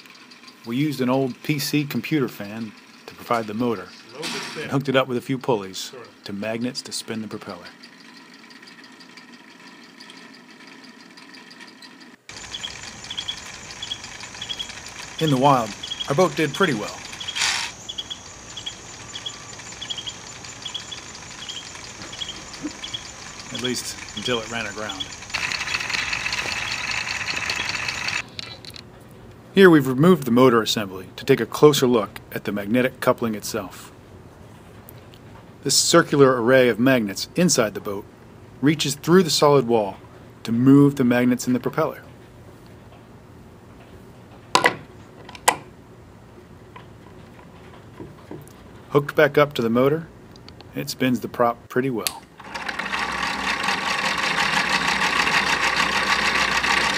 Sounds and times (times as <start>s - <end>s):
Speech: 0.7s - 7.8s, 15.2s - 17.0s, 23.5s - 25.1s, 29.6s - 33.9s, 35.6s - 42.1s, 48.9s - 50.1s, 50.7s - 52.2s.